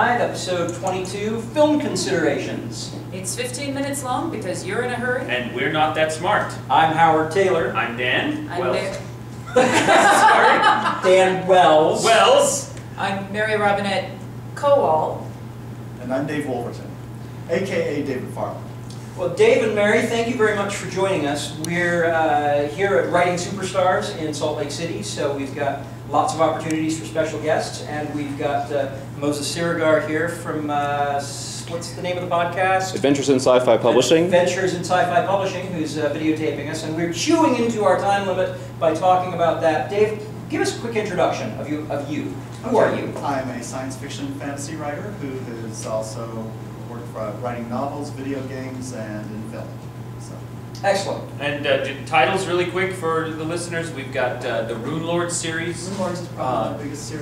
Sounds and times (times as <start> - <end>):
Speech: 16.0 - 57.2.